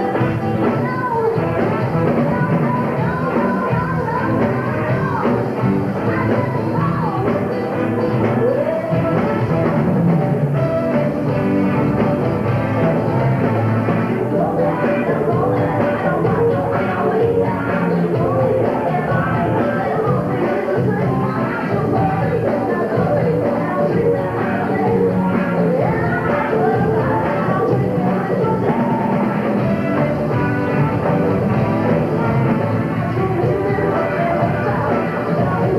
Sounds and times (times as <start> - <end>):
Music: 0.0 - 35.7.